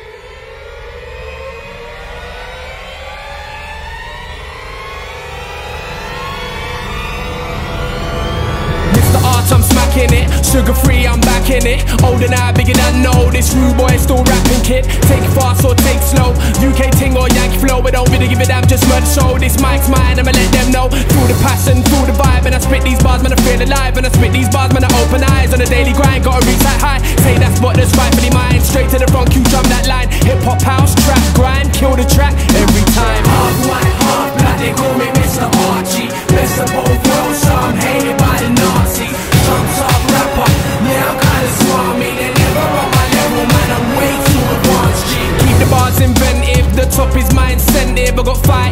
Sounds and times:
Music: 0.0s - 48.7s.

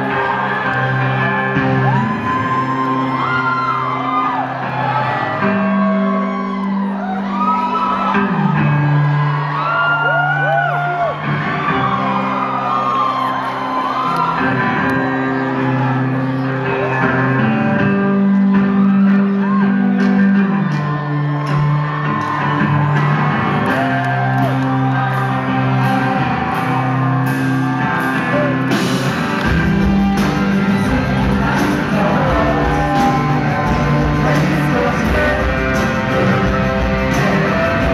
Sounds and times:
Music: 0.0s - 37.9s.

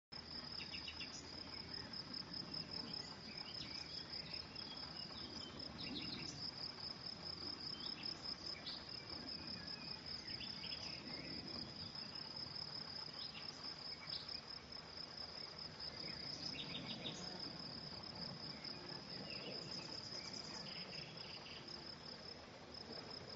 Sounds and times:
Cricket: 0.2s - 23.3s.

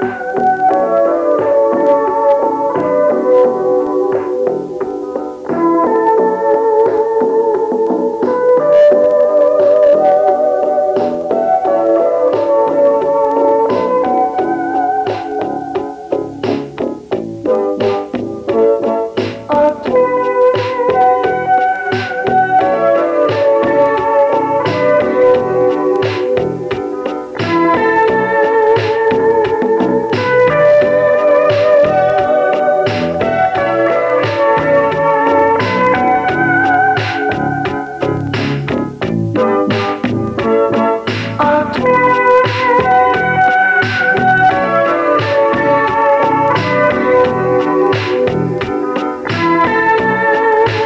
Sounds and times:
Music: 0.0s - 50.8s.

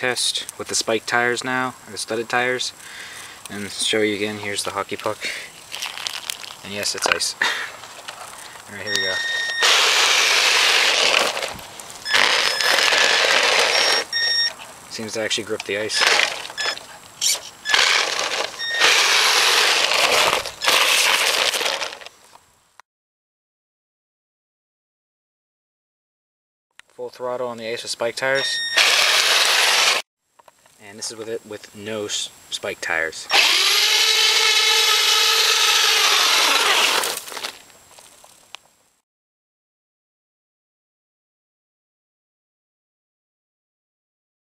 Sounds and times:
Speech: 0.0s - 2.8s, 3.5s - 5.5s, 6.6s - 7.4s, 8.7s - 9.2s, 14.9s - 16.0s, 27.0s - 28.6s, 30.8s - 33.3s.

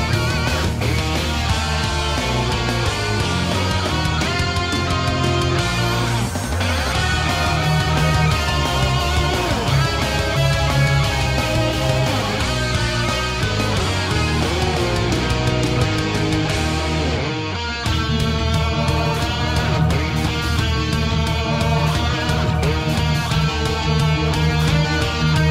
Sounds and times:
Music: 0.0s - 25.5s.

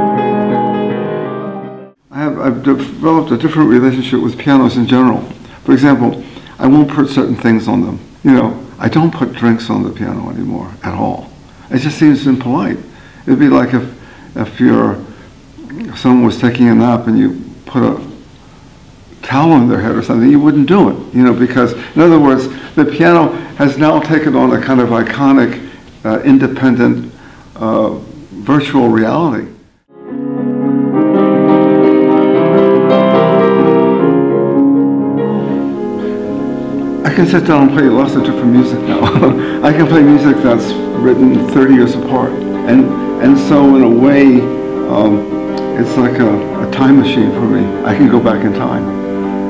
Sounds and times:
Music: 0.0s - 5.1s, 29.9s - 49.5s
Speech: 2.1s - 18.2s, 19.2s - 29.6s, 37.0s - 48.9s.

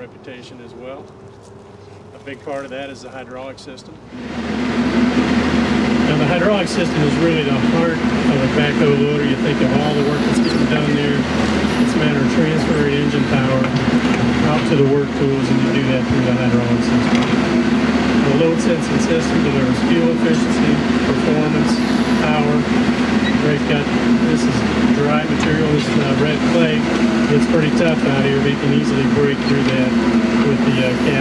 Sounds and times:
Speech: 0.0s - 1.1s, 2.1s - 4.0s, 6.0s - 11.3s, 11.9s - 13.8s, 14.4s - 17.0s, 18.2s - 22.7s, 23.4s - 31.2s.

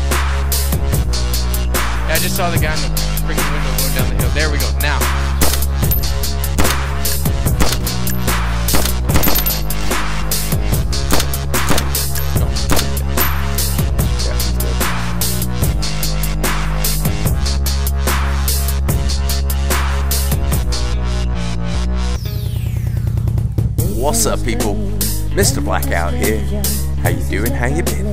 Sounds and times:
Music: 0.0s - 28.1s
Speech: 2.0s - 5.2s, 14.0s - 15.0s, 23.9s - 24.8s, 25.4s - 28.1s.

